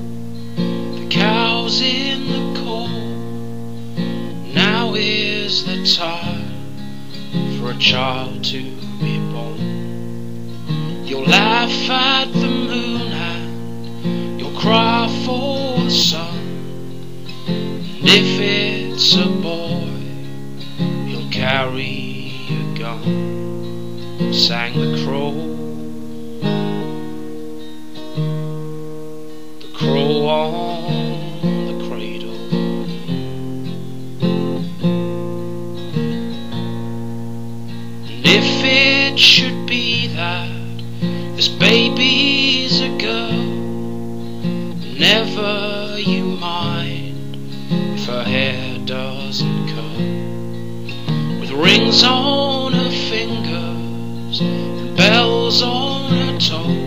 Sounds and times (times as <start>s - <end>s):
Music: 0.0s - 56.8s.